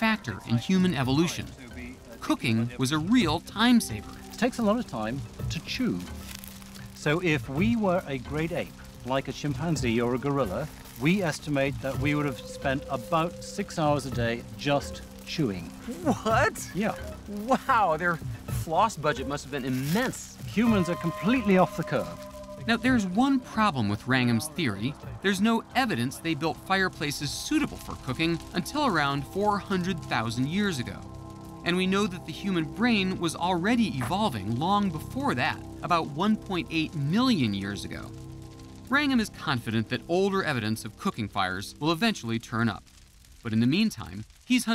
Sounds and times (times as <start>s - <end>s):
Speech: 0.0s - 6.2s, 6.8s - 31.0s, 31.6s - 38.1s, 38.9s - 42.8s, 43.4s - 44.7s
Music: 0.0s - 44.7s.